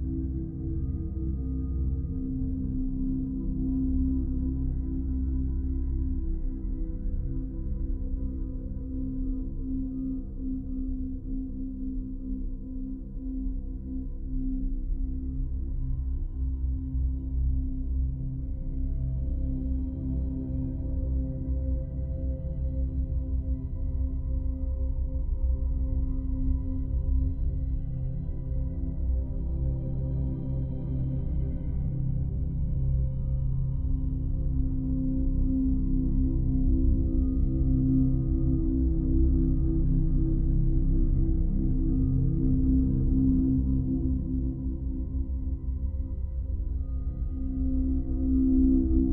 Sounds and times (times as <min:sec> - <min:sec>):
Music: 0:00.0 - 0:49.1.